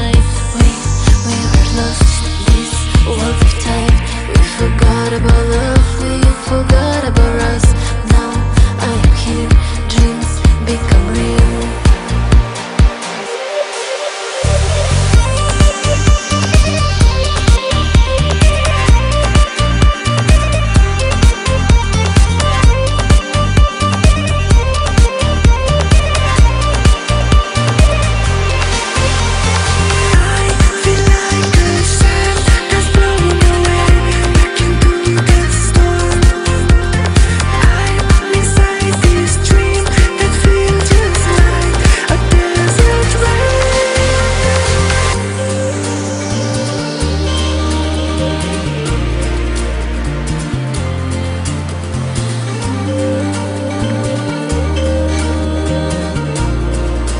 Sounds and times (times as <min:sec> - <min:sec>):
Electronic dance music: 0:00.0 - 0:57.1.